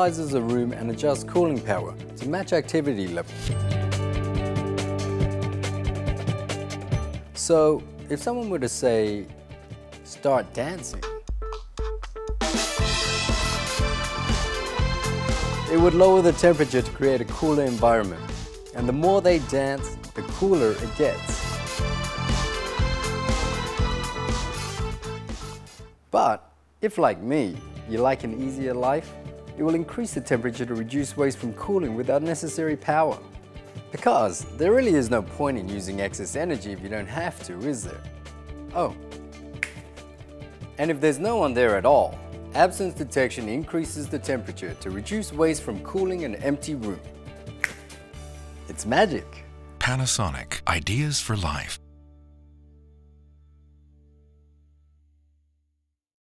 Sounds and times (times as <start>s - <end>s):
Speech: 0.0s - 3.3s, 7.4s - 9.3s, 10.1s - 11.1s, 15.7s - 18.2s, 18.8s - 21.2s, 26.1s - 33.2s, 34.0s - 38.0s, 40.8s - 47.0s, 48.7s - 51.8s
Music: 0.0s - 26.1s, 26.8s - 55.7s.